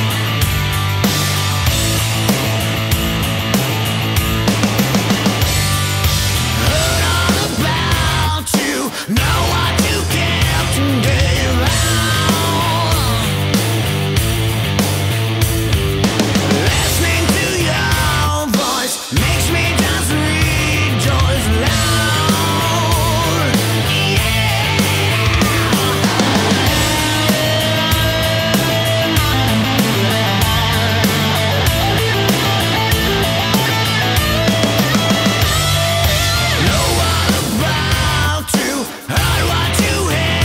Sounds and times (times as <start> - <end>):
Exciting music: 0.0 - 8.5, 9.2 - 40.4.